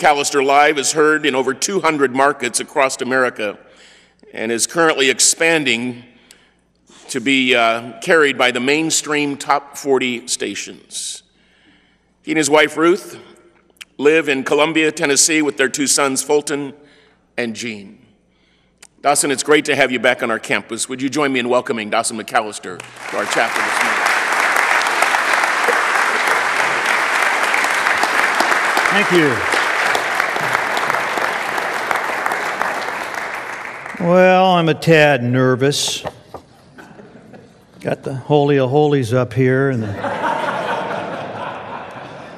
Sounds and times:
Speech: 0:00.0 - 0:03.6, 0:04.3 - 0:06.1, 0:07.1 - 0:11.2, 0:12.3 - 0:16.8, 0:17.4 - 0:18.0, 0:19.0 - 0:24.0, 0:28.9 - 0:29.4, 0:34.0 - 0:36.2, 0:37.8 - 0:40.0.

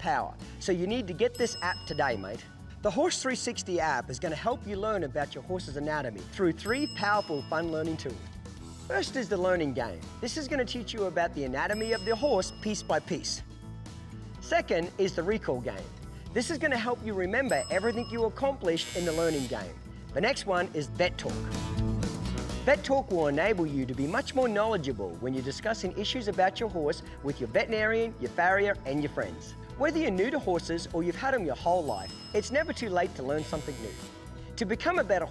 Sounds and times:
Speech: 0:00.0 - 0:08.2, 0:08.9 - 0:13.4, 0:14.4 - 0:21.4, 0:22.7 - 0:34.0, 0:34.6 - 0:35.3
Music: 0:00.0 - 0:35.3.

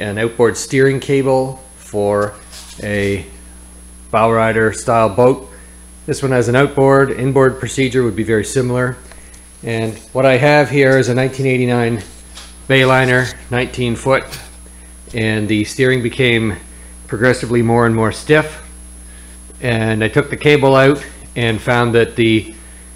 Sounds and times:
Speech: 0:00.0 - 0:03.4, 0:04.1 - 0:14.5, 0:15.1 - 0:18.7, 0:19.6 - 0:22.6.

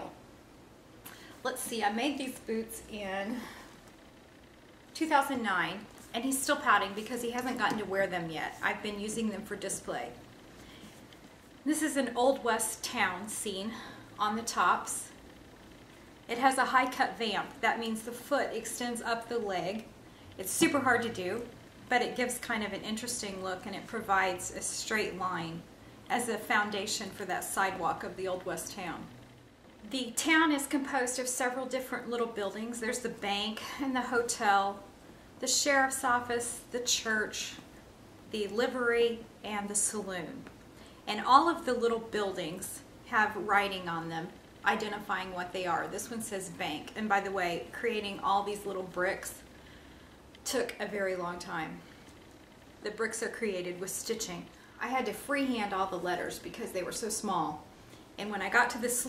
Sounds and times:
Inside, small room: 0:00.0 - 0:59.0
Speech: 0:01.4 - 0:03.5, 0:05.0 - 0:10.2, 0:11.7 - 0:15.2, 0:16.3 - 0:29.2, 0:29.9 - 0:37.6, 0:38.3 - 0:40.5, 0:41.1 - 0:49.4, 0:50.4 - 0:51.8, 0:52.8 - 0:59.0.

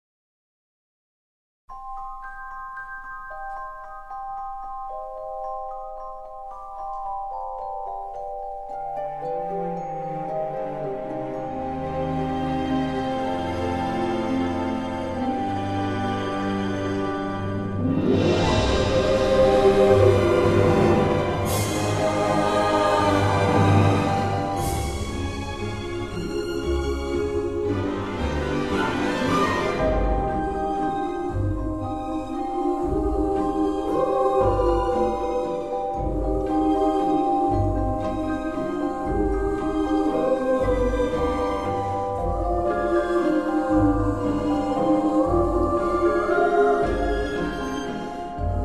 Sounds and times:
Music: 0:01.7 - 0:48.6.

